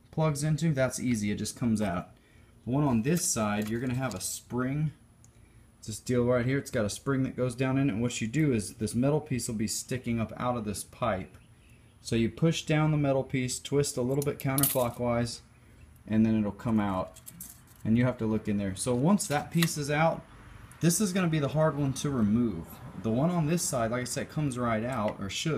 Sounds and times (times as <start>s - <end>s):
Speech: 0.0s - 5.0s, 5.8s - 11.4s, 12.0s - 15.4s, 16.1s - 17.2s, 17.8s - 20.2s, 20.8s - 25.5s.